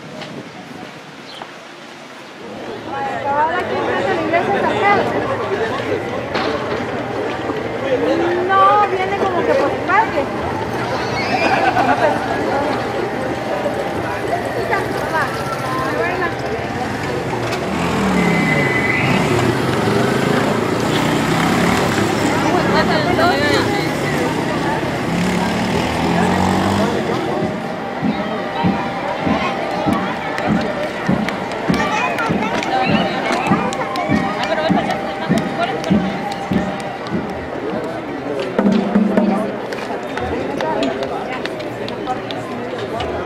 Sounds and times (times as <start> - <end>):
Chatter: 0.0 - 43.2
Speech: 2.4 - 43.2.